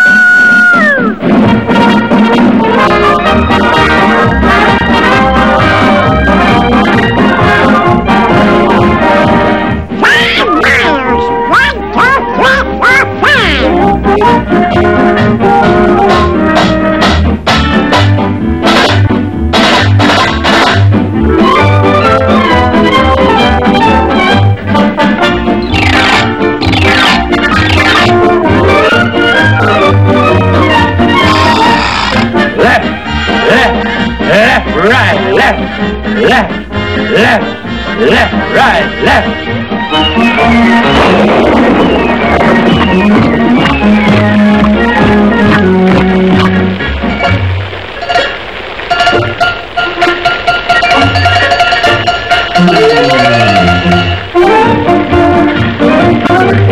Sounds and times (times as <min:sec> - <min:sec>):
Music: 0:00.0 - 0:56.7
Speech: 0:10.0 - 0:13.8, 0:32.6 - 0:39.4.